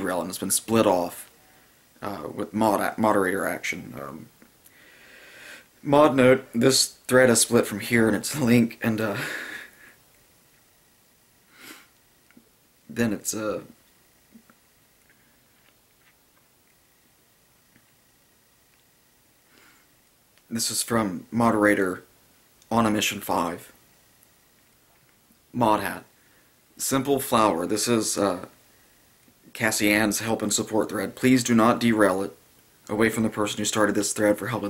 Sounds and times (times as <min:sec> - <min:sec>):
Speech: 0:00.0 - 0:01.3, 0:02.0 - 0:04.3, 0:05.8 - 0:09.2, 0:12.9 - 0:13.8, 0:20.5 - 0:22.1, 0:22.7 - 0:23.8, 0:25.5 - 0:26.1, 0:26.8 - 0:28.6, 0:29.5 - 0:34.7.